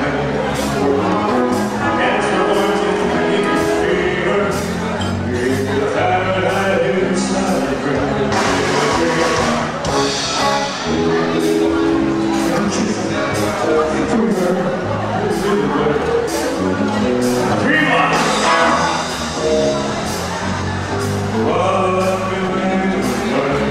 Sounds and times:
Singing: 0:00.0 - 0:09.8, 0:21.4 - 0:23.7
Music: 0:00.0 - 0:23.7.

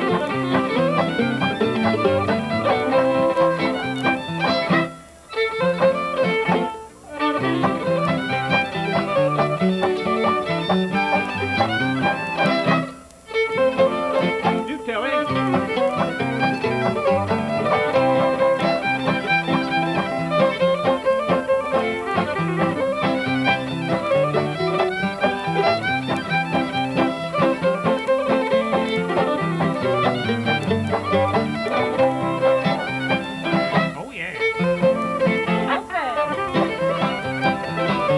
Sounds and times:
Violin, fiddle: 0:00.0 - 0:38.1.

